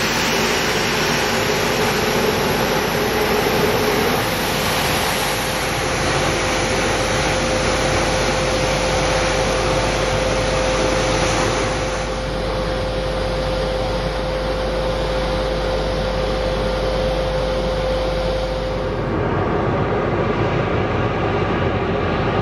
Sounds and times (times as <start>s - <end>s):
Aircraft engine: 0.0s - 22.4s.